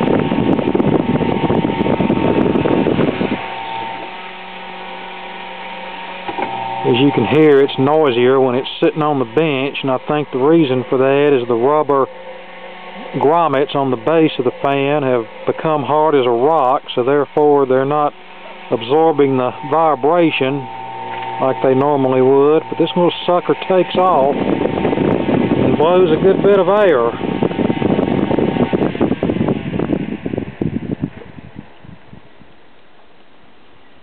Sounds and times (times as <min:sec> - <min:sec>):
Mechanical fan: 0:00.0 - 0:34.0
Speech: 0:06.8 - 0:12.1, 0:13.0 - 0:18.1, 0:18.7 - 0:20.7, 0:21.4 - 0:24.4, 0:25.8 - 0:27.2.